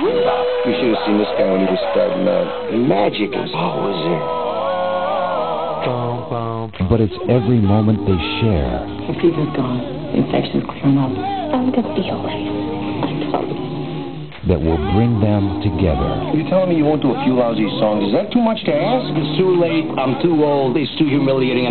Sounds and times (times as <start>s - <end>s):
Music: 0.0s - 21.7s
Speech: 5.9s - 12.5s, 14.4s - 21.7s.